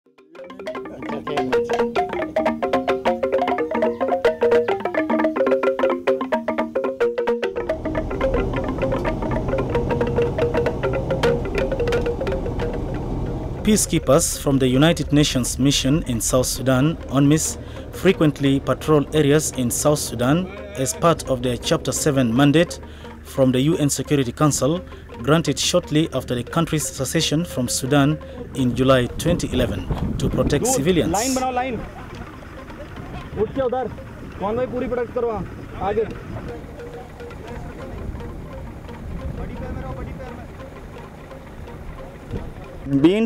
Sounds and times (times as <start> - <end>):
Wood block: 0.2 - 22.8.